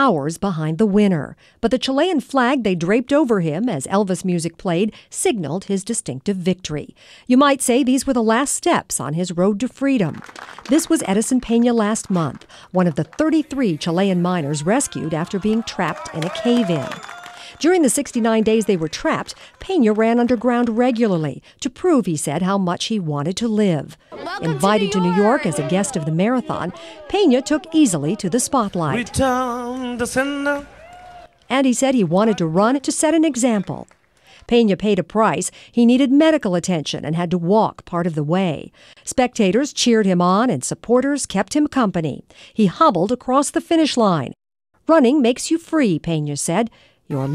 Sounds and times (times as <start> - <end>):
Speech: 0.0 - 17.0, 17.6 - 30.7, 31.5 - 33.9, 34.5 - 47.3.